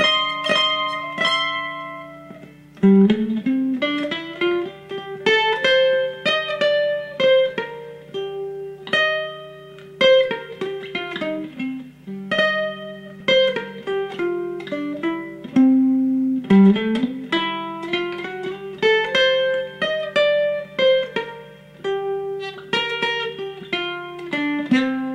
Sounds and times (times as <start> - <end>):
Guitar: 0.0 - 25.1
Mandolin: 0.0 - 25.1.